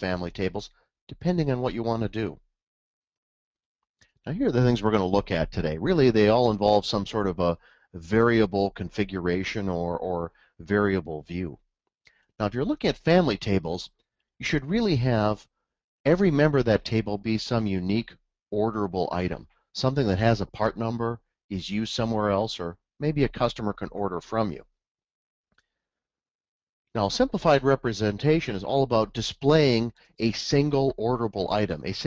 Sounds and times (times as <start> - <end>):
Speech: 0.0 - 2.4, 4.2 - 11.6, 12.4 - 15.5, 16.1 - 24.7, 27.0 - 32.0.